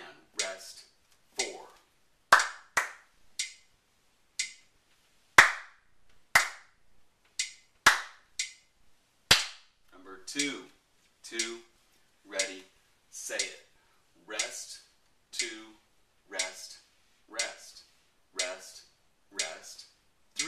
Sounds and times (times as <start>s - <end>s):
Speech: 0.0s - 1.9s, 9.9s - 11.7s, 12.3s - 20.4s
Inside, small room: 0.0s - 20.4s
Clapping: 2.4s - 3.0s, 5.4s - 5.7s, 6.4s - 6.6s, 7.9s - 8.2s.